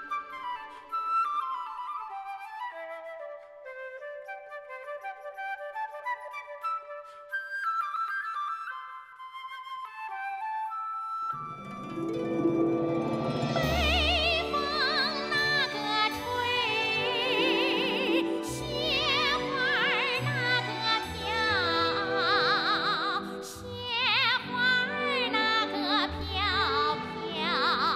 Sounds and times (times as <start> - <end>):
Music: 0.0 - 27.9.